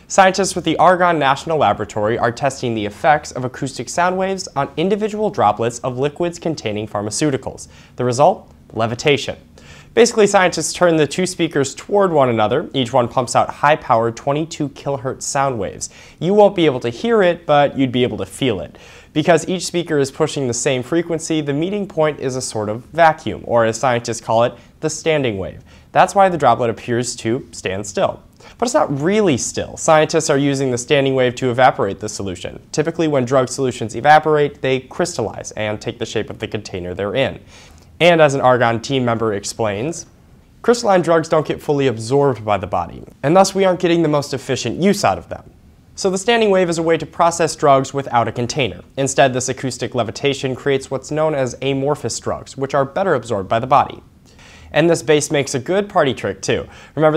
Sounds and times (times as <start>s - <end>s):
Speech: 0.0s - 54.1s, 54.7s - 57.1s.